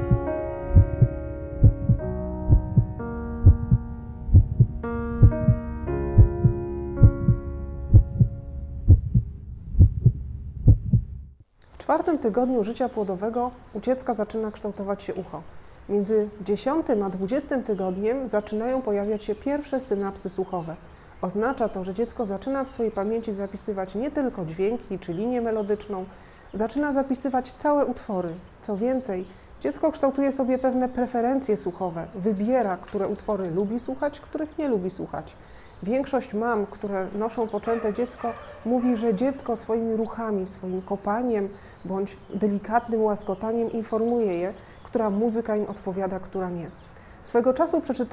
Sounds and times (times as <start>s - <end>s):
Speech: 11.8s - 48.1s.